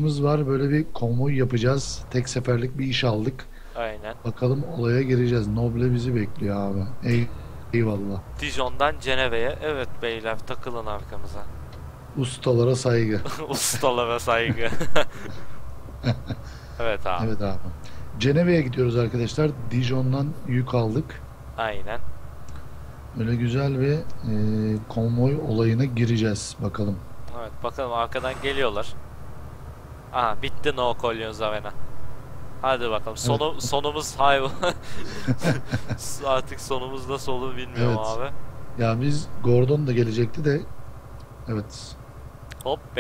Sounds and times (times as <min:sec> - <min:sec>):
Speech: 0:00.0 - 0:11.5, 0:12.2 - 0:14.8, 0:16.8 - 0:22.0, 0:23.2 - 0:29.0, 0:30.2 - 0:31.7, 0:32.6 - 0:34.8, 0:36.0 - 0:40.7, 0:41.5 - 0:42.0.